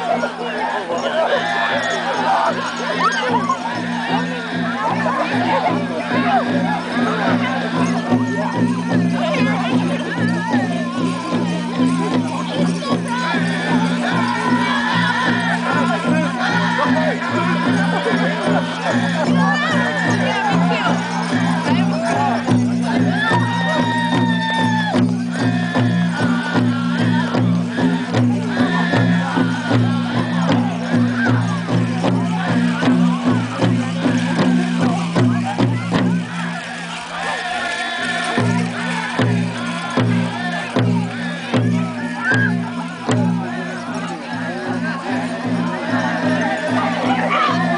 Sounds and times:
Speech: 0:00.0 - 0:47.7.

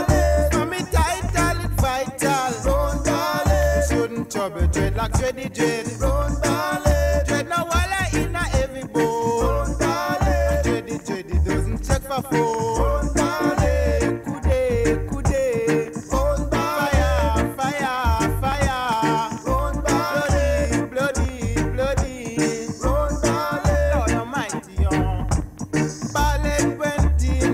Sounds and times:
Independent music: 0:00.0 - 0:27.5.

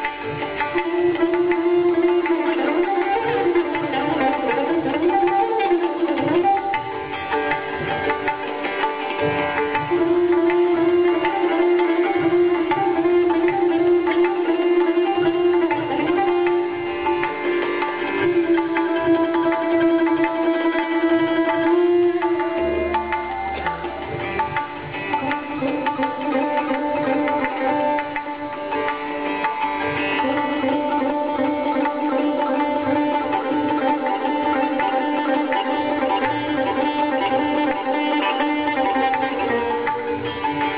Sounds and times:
Sitar: 0:00.0 - 0:40.7
Tabla: 0:00.0 - 0:40.7
Traditional music: 0:00.0 - 0:40.7.

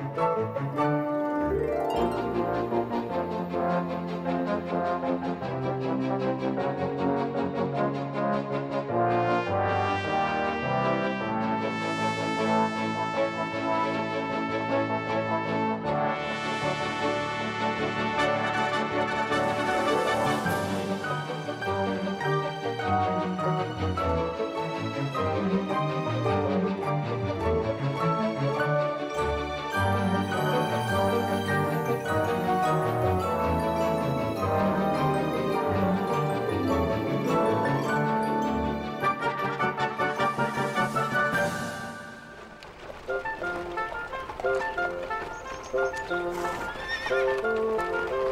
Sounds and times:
Trombone: 0:02.2 - 0:22.0, 0:29.8 - 0:42.4.

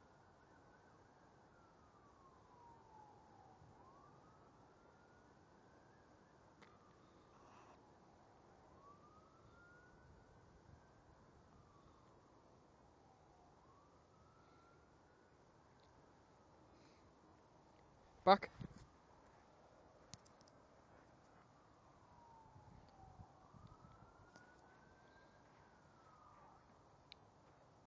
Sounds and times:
Speech: 0:18.2 - 0:18.6.

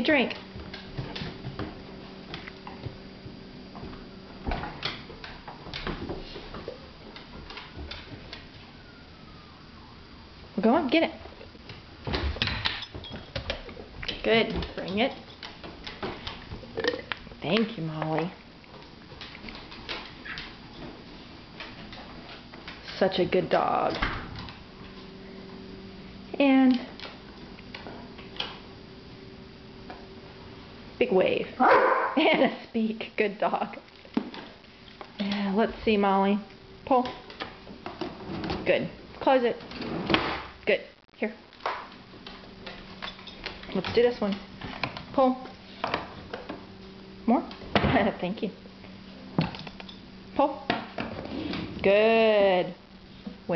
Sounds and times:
Bow-wow: 0:31.6 - 0:32.2.

